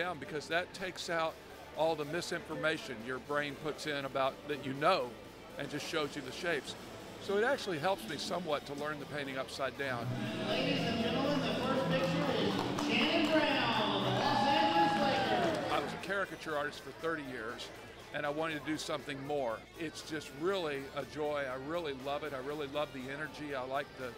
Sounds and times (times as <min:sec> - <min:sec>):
Speech: 0:00.0 - 0:24.1.